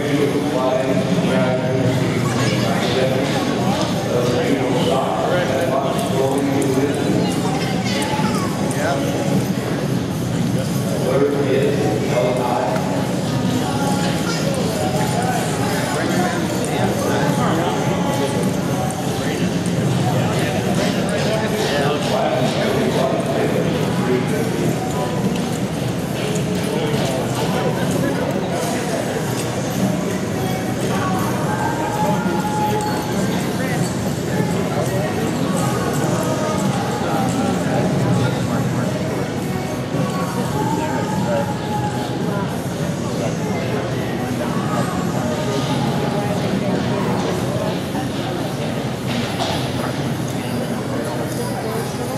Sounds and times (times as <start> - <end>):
Speech: 0.0 - 52.1.